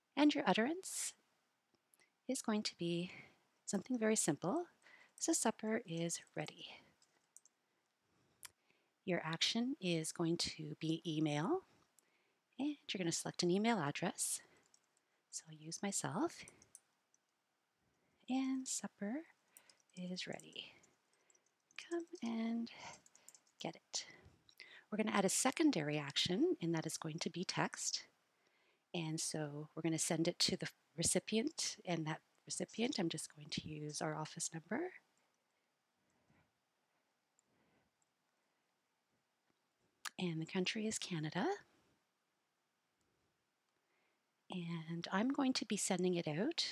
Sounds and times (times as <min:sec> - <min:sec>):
Speech: 0:00.2 - 0:01.2, 0:02.3 - 0:06.8, 0:09.1 - 0:11.6, 0:12.6 - 0:14.4, 0:15.4 - 0:16.4, 0:18.3 - 0:19.3, 0:20.0 - 0:20.7, 0:21.8 - 0:22.9, 0:23.6 - 0:24.1, 0:24.9 - 0:28.1, 0:29.0 - 0:35.0, 0:40.1 - 0:41.6, 0:44.5 - 0:46.7.